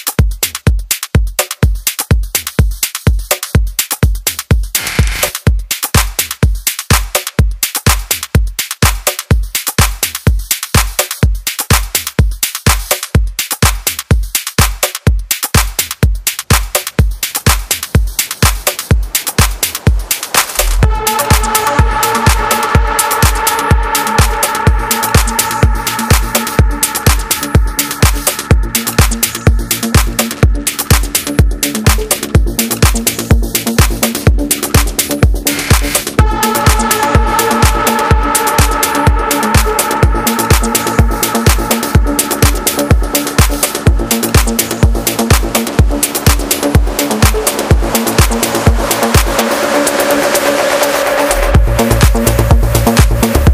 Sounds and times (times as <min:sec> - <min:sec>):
Music: 0:00.0 - 0:53.5.